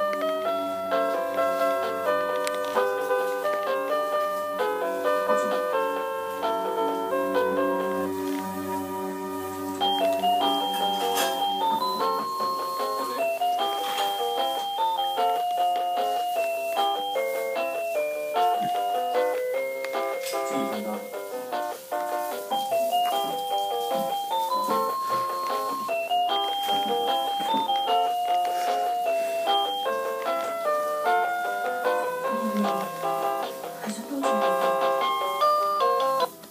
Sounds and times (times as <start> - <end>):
Piano: 0.0 - 36.5
Speech: 20.3 - 21.2, 33.7 - 34.7.